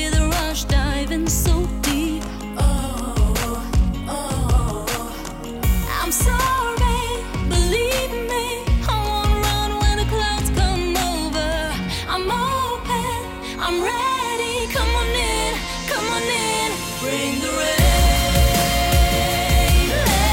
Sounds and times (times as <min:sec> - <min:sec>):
Music of Asia: 0:00.0 - 0:12.2, 0:12.8 - 0:20.3.